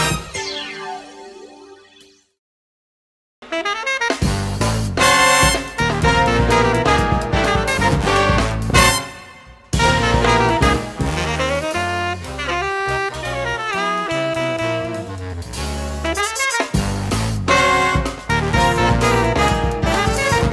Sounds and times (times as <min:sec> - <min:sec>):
Music: 0:00.0 - 0:02.4, 0:03.4 - 0:20.5.